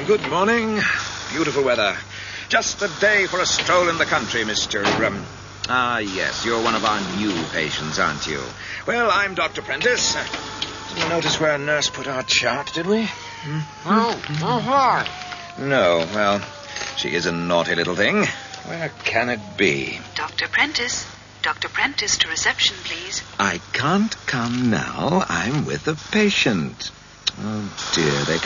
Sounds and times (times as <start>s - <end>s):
Speech: 0.0s - 10.3s, 10.9s - 28.4s.